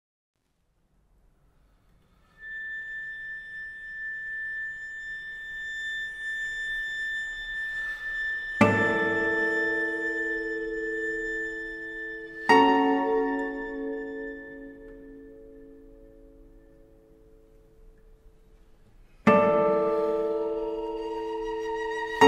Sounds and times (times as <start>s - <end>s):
Cello: 1.5s - 22.2s
Guitar: 8.6s - 18.1s, 19.2s - 22.2s.